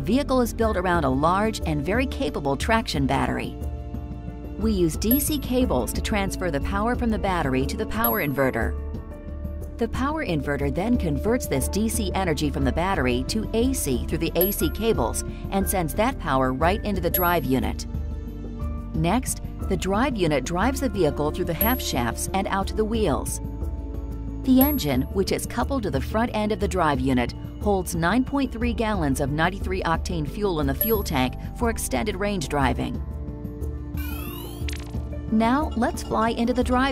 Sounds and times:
Speech: 0:00.0 - 0:03.6, 0:04.6 - 0:08.7, 0:09.8 - 0:17.8, 0:19.0 - 0:23.4, 0:24.5 - 0:33.0, 0:35.3 - 0:36.9
Music: 0:00.0 - 0:36.9.

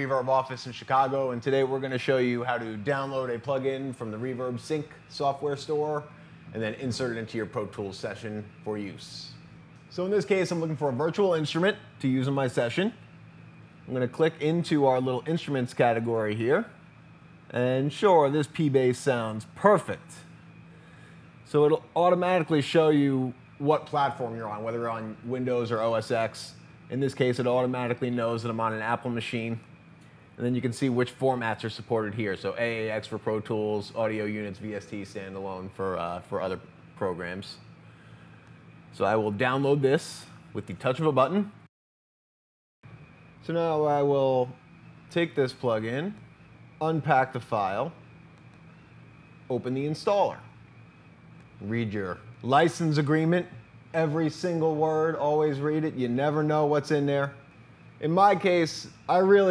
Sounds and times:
Speech: 0:00.0 - 0:13.0, 0:13.9 - 0:16.8, 0:17.5 - 0:20.3, 0:21.5 - 0:29.7, 0:30.4 - 0:37.7, 0:38.9 - 0:41.7, 0:43.4 - 0:48.0, 0:49.5 - 0:50.6, 0:51.6 - 0:57.4, 0:58.0 - 0:59.5.

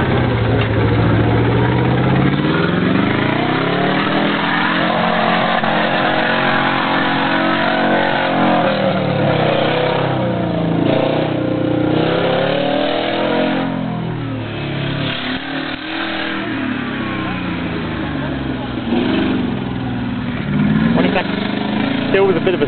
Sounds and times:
Medium engine (mid frequency): 0:00.0 - 0:22.6
Vehicle: 0:00.0 - 0:22.6
Accelerating, revving, vroom: 0:02.2 - 0:13.8, 0:14.6 - 0:17.4, 0:18.8 - 0:19.5, 0:20.6 - 0:22.6
Speech: 0:22.1 - 0:22.6.

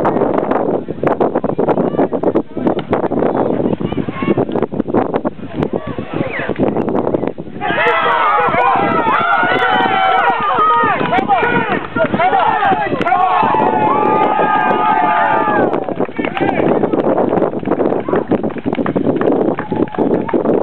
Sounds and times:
Speech: 0:01.5 - 0:04.5, 0:10.8 - 0:13.3.

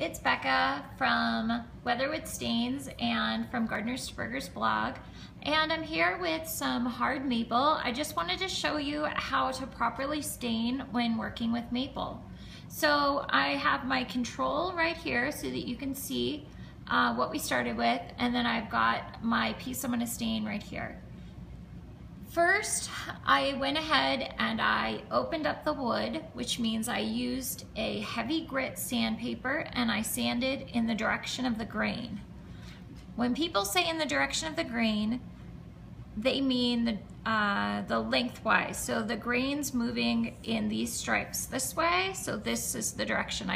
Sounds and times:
Speech: 0:00.0 - 0:21.0, 0:22.3 - 0:32.2, 0:33.2 - 0:35.2, 0:36.2 - 0:43.5.

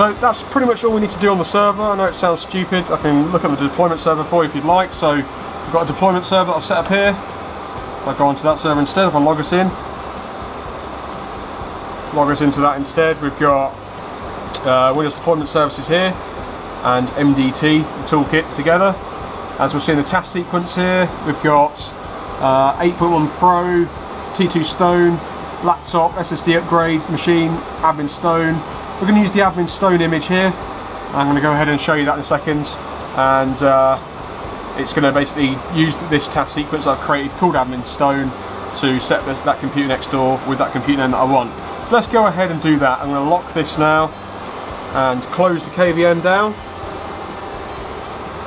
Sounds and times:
Speech: 0:00.0 - 0:07.2, 0:08.1 - 0:09.8, 0:12.1 - 0:13.8, 0:14.6 - 0:16.2, 0:16.8 - 0:19.0, 0:19.6 - 0:34.0, 0:34.8 - 0:44.2, 0:45.0 - 0:46.6
Music: 0:00.0 - 0:48.4.

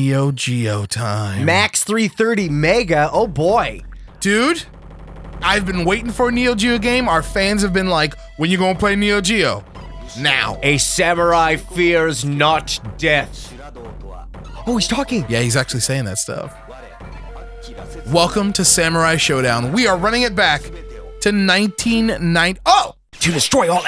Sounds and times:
Speech: 0:00.0 - 0:04.7, 0:05.4 - 0:09.6, 0:10.2 - 0:17.0, 0:17.7 - 0:23.8
Music: 0:05.5 - 0:22.4.

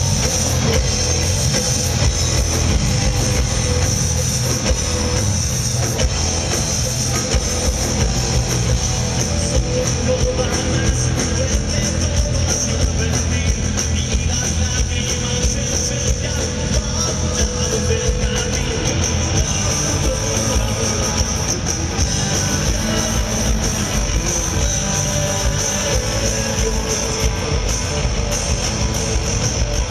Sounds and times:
Music: 0:00.0 - 0:29.9.

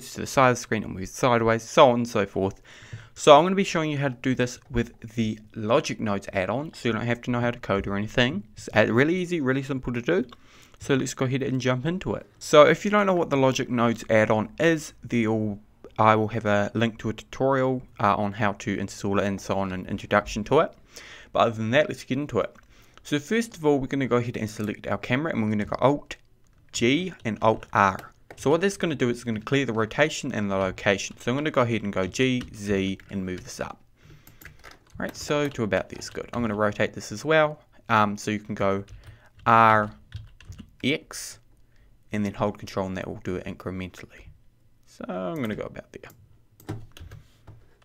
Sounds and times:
Speech: 0:00.0 - 0:02.6, 0:03.2 - 0:20.8, 0:21.4 - 0:33.8, 0:35.0 - 0:40.0, 0:40.8 - 0:41.4, 0:42.1 - 0:44.3, 0:44.9 - 0:46.2.

